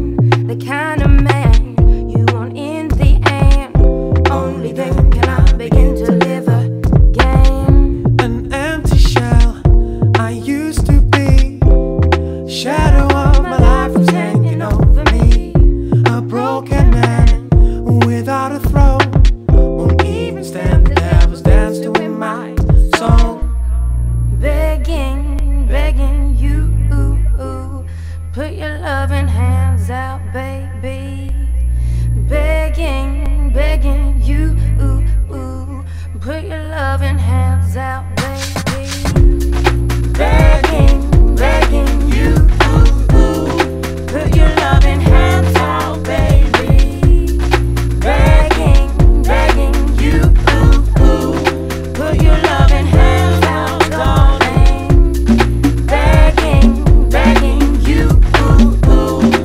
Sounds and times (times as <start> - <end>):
Music: 0.0 - 26.9, 38.2 - 59.4.